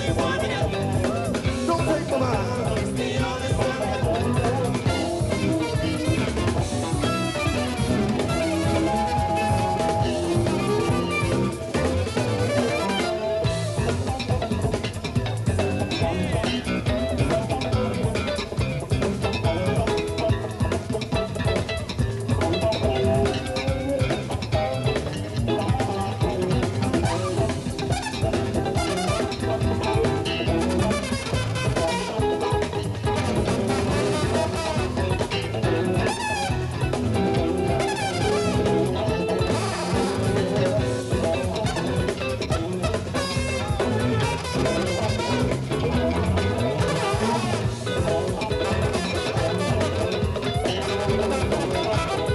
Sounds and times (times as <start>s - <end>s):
Jazz: 0.0s - 52.3s.